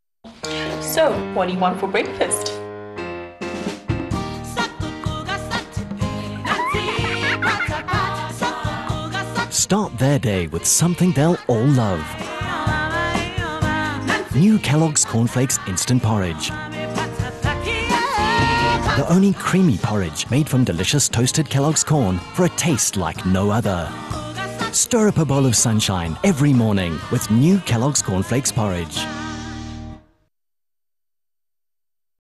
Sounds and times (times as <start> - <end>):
Music: 0.3 - 30.3
Speech: 9.6 - 12.1, 14.4 - 16.5, 19.0 - 23.9, 24.8 - 29.0.